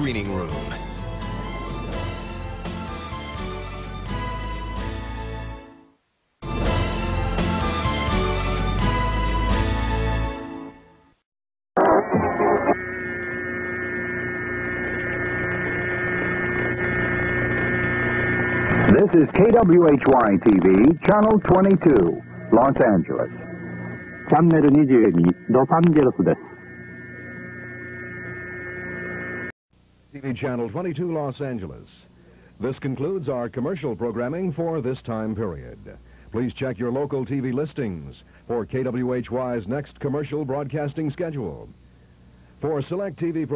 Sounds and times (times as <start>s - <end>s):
Hum: 0.0s - 5.6s, 11.8s - 43.5s
Mains hum: 11.8s - 43.5s.